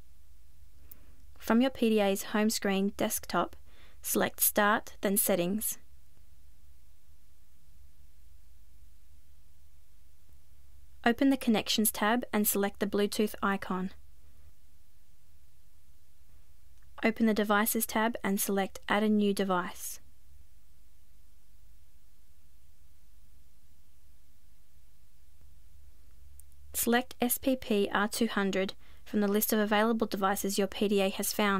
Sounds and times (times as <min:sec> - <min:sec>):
Speech: 0:01.4 - 0:05.8, 0:11.0 - 0:14.0, 0:17.0 - 0:20.0, 0:26.8 - 0:31.5.